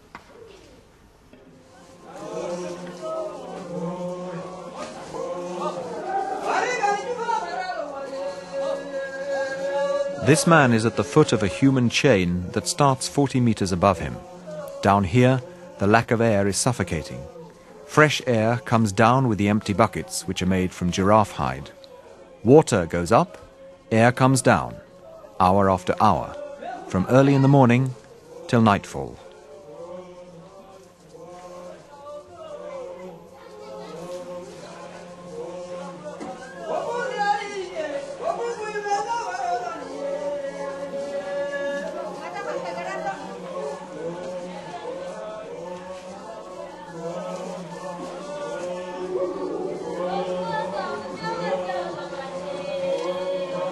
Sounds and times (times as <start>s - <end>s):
Speech: 10.2s - 21.8s, 22.4s - 29.3s.